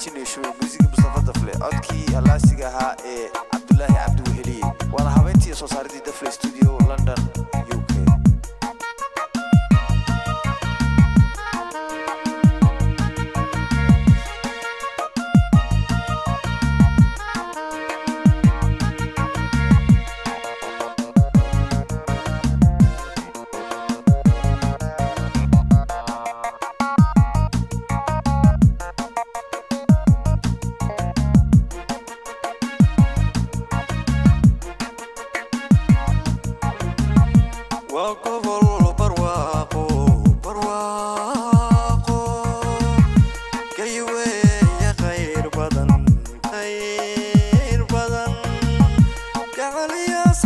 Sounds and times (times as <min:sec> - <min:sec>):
Music: 0:00.0 - 0:50.4.